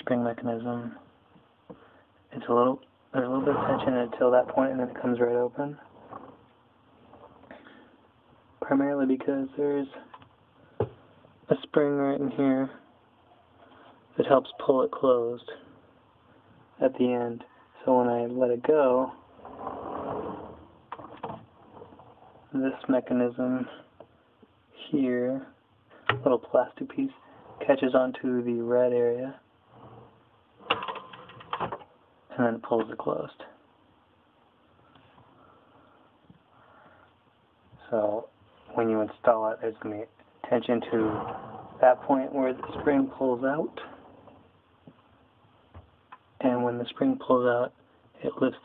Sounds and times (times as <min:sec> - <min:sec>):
Speech: 0:00.0 - 0:01.1, 0:02.3 - 0:05.9, 0:08.6 - 0:10.2, 0:11.5 - 0:12.8, 0:14.1 - 0:15.8, 0:16.8 - 0:19.2, 0:22.5 - 0:23.9, 0:24.8 - 0:25.6, 0:26.2 - 0:29.5, 0:32.3 - 0:33.6, 0:37.8 - 0:44.0, 0:46.4 - 0:48.6
Drawer open or close: 0:03.2 - 0:07.5, 0:19.2 - 0:22.5, 0:29.7 - 0:31.9, 0:40.7 - 0:44.6.